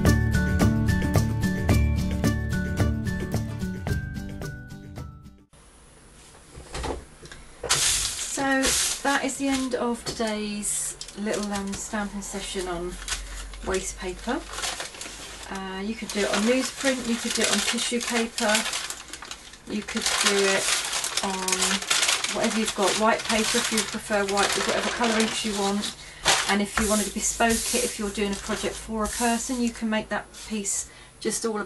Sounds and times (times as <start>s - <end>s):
Music: 0.0s - 5.6s
Speech: 8.3s - 13.0s, 13.6s - 14.5s, 15.5s - 18.7s, 19.7s - 31.6s.